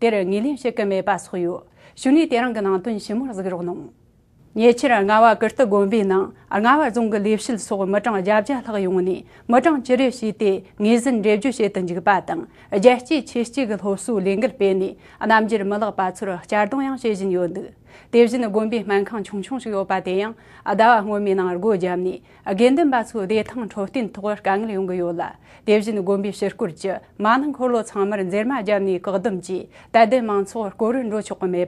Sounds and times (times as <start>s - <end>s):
Speech: 0.0s - 4.0s, 4.6s - 31.6s.